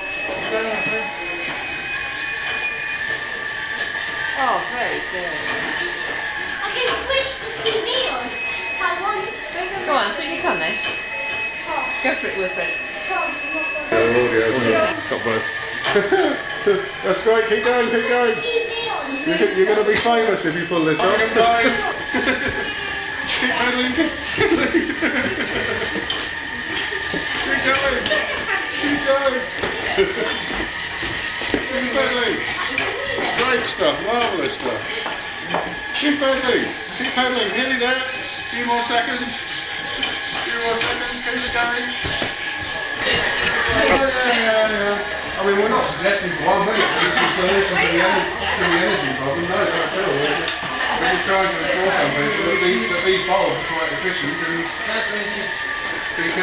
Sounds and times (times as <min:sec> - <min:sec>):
Bicycle: 0:00.0 - 0:56.4.